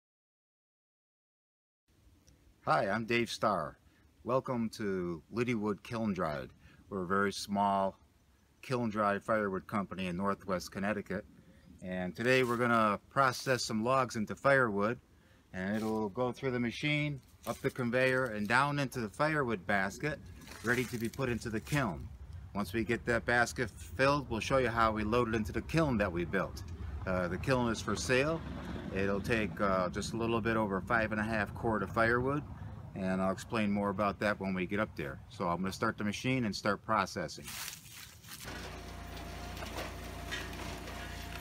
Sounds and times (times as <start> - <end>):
Speech: 2.6 - 8.0, 8.6 - 11.2, 11.8 - 15.0, 15.6 - 37.5.